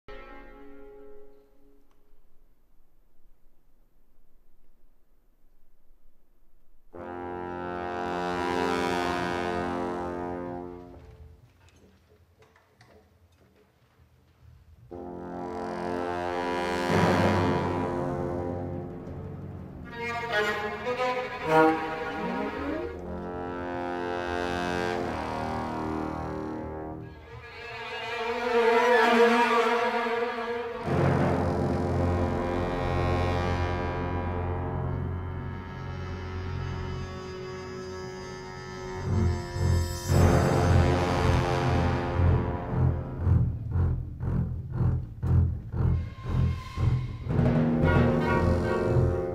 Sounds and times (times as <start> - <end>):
Music: 0.0 - 4.8, 5.5 - 11.6, 14.8 - 49.3
Inside, large room or hall: 0.0 - 49.3.